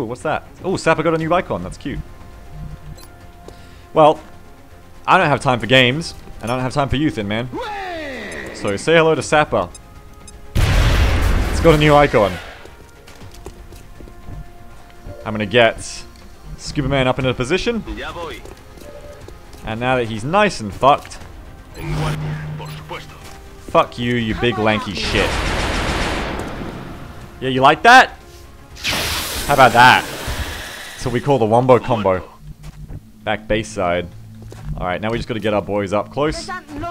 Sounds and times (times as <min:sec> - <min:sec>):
Music: 0:00.0 - 0:36.9
Fusillade: 0:25.0 - 0:26.9.